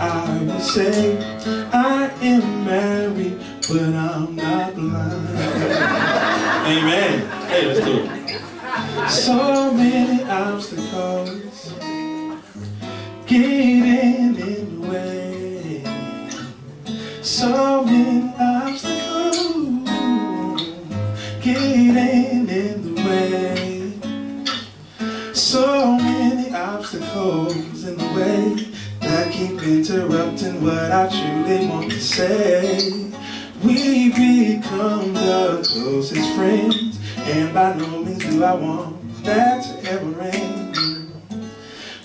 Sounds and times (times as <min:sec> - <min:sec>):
Speech: 0:06.7 - 0:08.2.